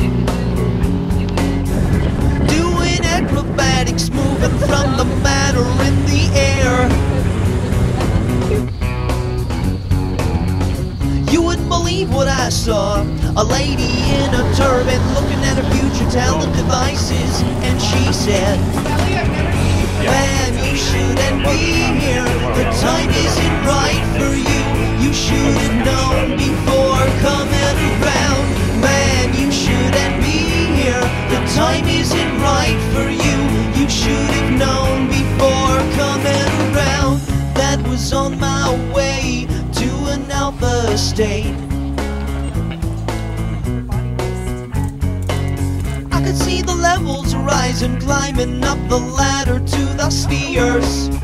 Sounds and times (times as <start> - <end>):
Music: 0.0 - 51.2
Speech: 2.4 - 8.8, 13.3 - 41.6, 46.0 - 51.2.